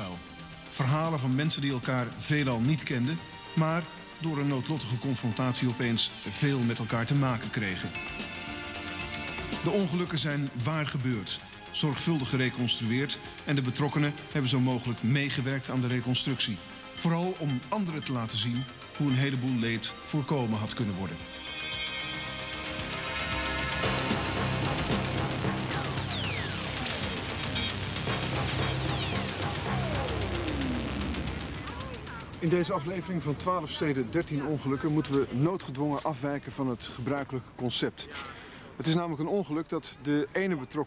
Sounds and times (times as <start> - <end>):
Speech: 0.0 - 8.0, 9.6 - 21.2, 31.6 - 40.8
Music: 0.0 - 37.0.